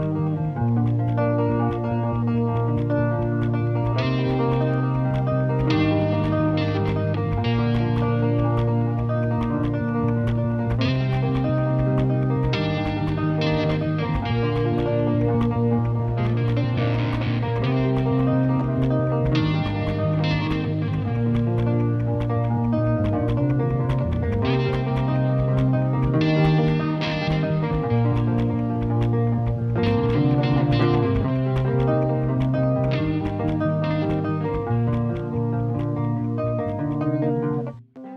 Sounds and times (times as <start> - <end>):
Rock music: 0.0 - 37.7.